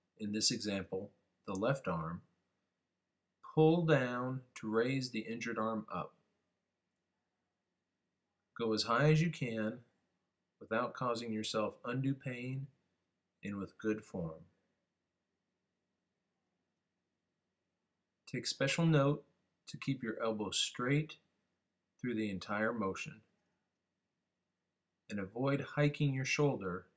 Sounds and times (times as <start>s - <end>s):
Speech: 0.2s - 2.3s, 3.5s - 6.2s, 8.6s - 9.9s, 10.6s - 12.8s, 13.4s - 14.5s, 18.3s - 21.2s, 22.0s - 23.3s, 25.1s - 26.9s.